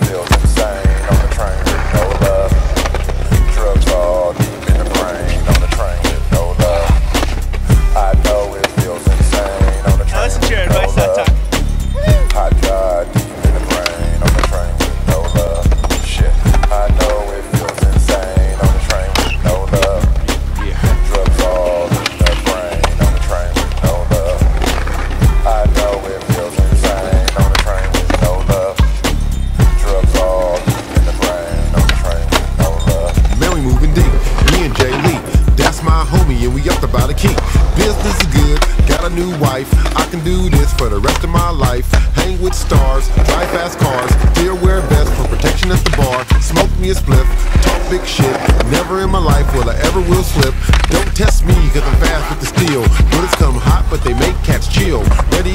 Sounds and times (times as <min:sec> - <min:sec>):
Music: 0:00.0 - 0:55.5
Skateboard: 0:00.0 - 0:55.5
Speech: 0:09.9 - 0:11.3.